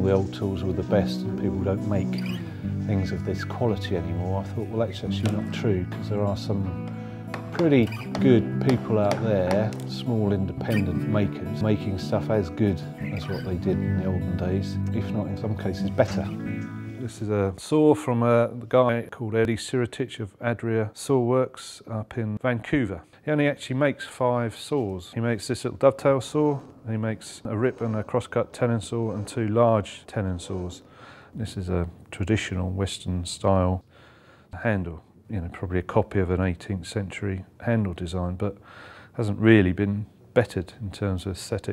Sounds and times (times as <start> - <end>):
Speech: 0.0 - 2.3, 2.9 - 6.8, 7.5 - 16.4, 17.0 - 33.9, 34.6 - 38.6, 39.2 - 41.7
Music: 0.0 - 17.5.